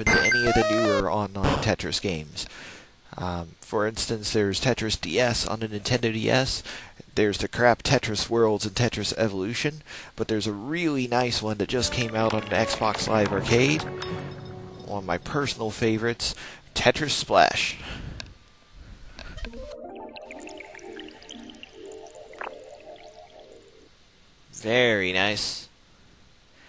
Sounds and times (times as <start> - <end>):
Speech: 0.0 - 2.5, 3.1 - 13.9, 14.9 - 17.8, 24.5 - 25.8.